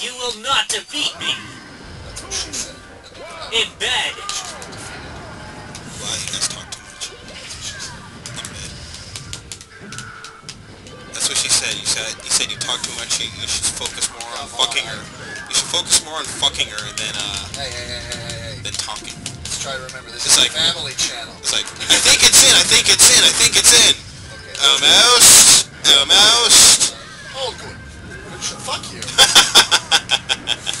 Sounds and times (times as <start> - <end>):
Music: 1.2 - 30.8
Speech: 6.0 - 8.7, 11.2 - 29.3.